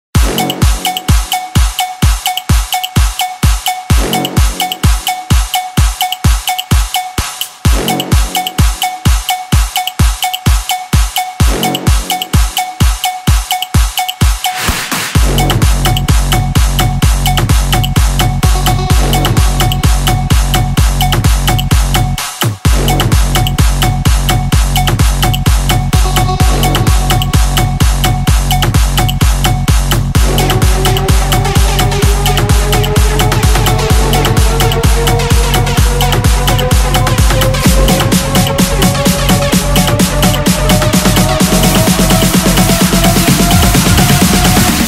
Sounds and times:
Electronic dance music: 0.1s - 44.8s.

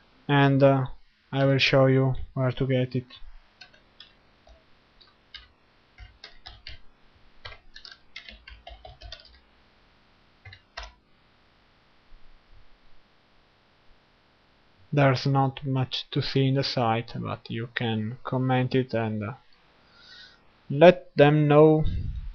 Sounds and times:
Speech: 0.3s - 3.2s, 15.0s - 19.4s, 20.7s - 22.2s.

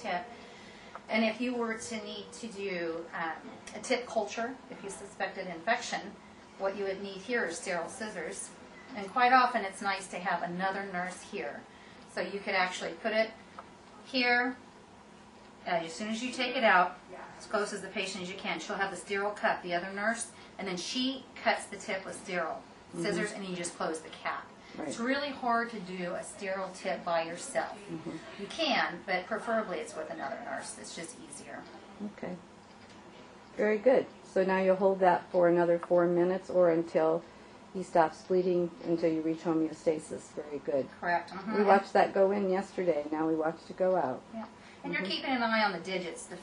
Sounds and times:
Conversation: 0.0s - 46.4s.

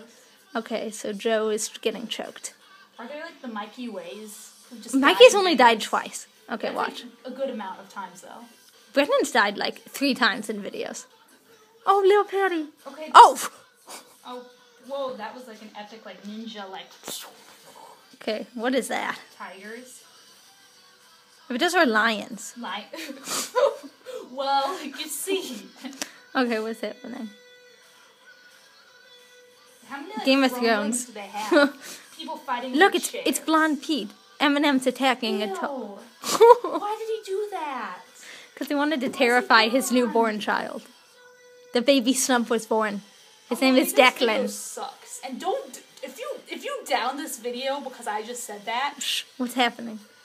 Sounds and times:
Inside, small room: 0.0s - 50.2s.

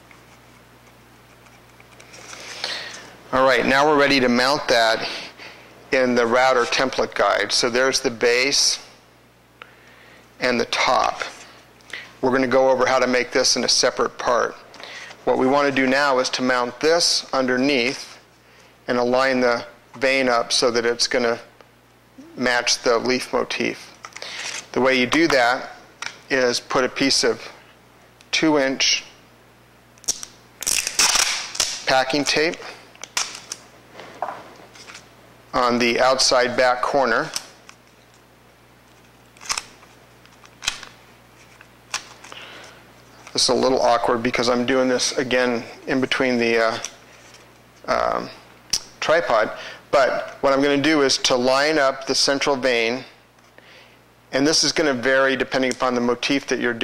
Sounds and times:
Speech: 3.3s - 5.3s, 5.9s - 8.9s, 10.4s - 11.4s, 12.2s - 14.6s, 15.2s - 18.2s, 18.9s - 21.5s, 22.2s - 24.0s, 24.7s - 27.6s, 28.3s - 29.2s, 31.8s - 32.8s, 35.5s - 37.4s, 43.3s - 47.0s, 47.8s - 48.4s, 49.0s - 53.2s, 54.3s - 56.8s.

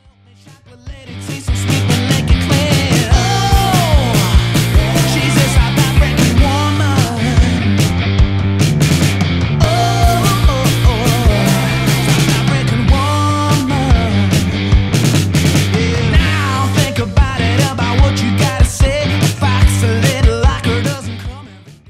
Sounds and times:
Grunge: 0.0s - 21.8s.

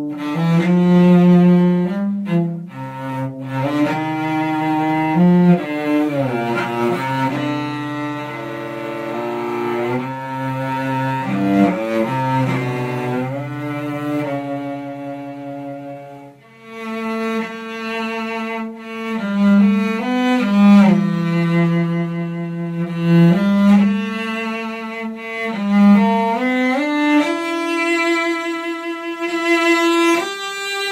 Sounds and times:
Cello: 0.0s - 30.9s
Double bass: 0.0s - 30.9s
String section: 0.0s - 30.9s.

